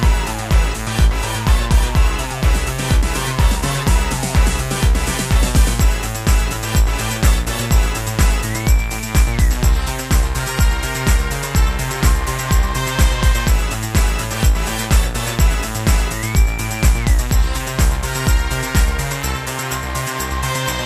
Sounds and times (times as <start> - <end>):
Techno: 0.0 - 20.8.